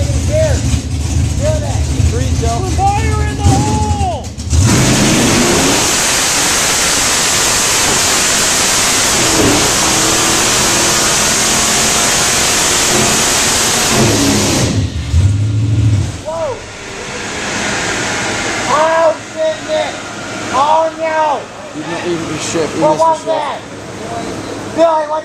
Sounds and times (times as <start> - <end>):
Speech: 0.0 - 0.6, 1.4 - 4.3, 16.2 - 16.6, 18.7 - 25.2.